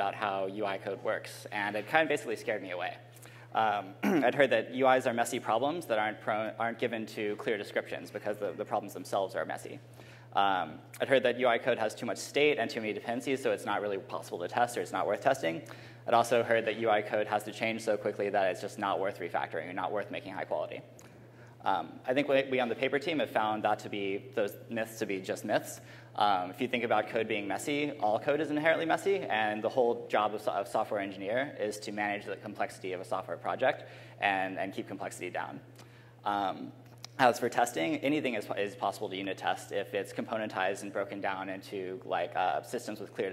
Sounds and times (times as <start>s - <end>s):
Speech: 0.0s - 9.8s, 10.4s - 20.9s, 21.6s - 43.3s.